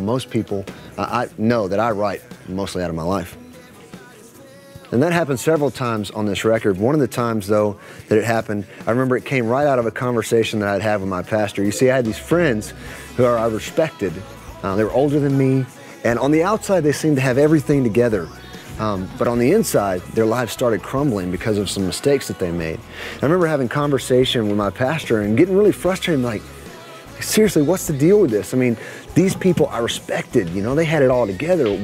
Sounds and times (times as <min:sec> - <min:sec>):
Speech: 0:00.0 - 0:03.4, 0:04.9 - 0:26.4, 0:27.2 - 0:31.8
Music: 0:00.0 - 0:31.8.